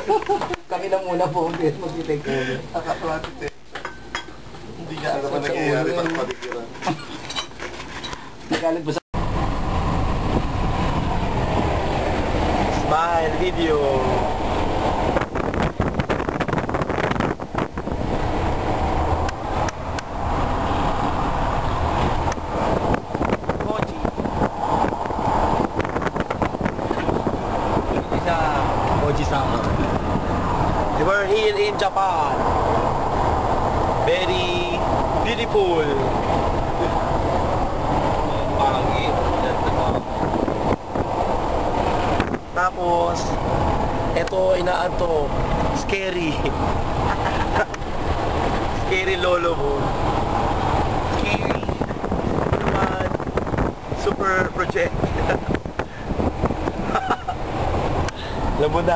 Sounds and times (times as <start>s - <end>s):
Outside, urban or manmade: 0.0s - 58.9s
Speech: 34.1s - 36.2s, 44.2s - 46.5s, 48.8s - 49.9s, 54.0s - 55.0s, 58.6s - 58.9s.